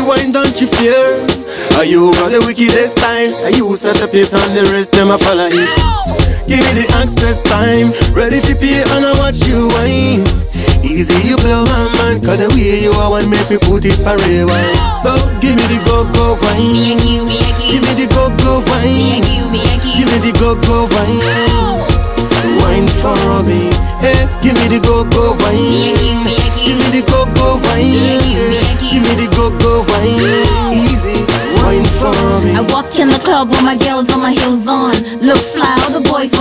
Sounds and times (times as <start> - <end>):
Music: 0.0 - 36.4.